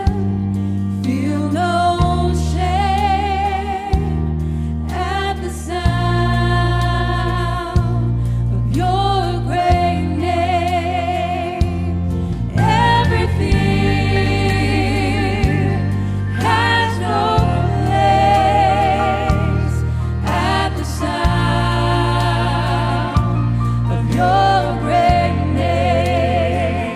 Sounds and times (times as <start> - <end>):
Music: 0.0 - 26.9.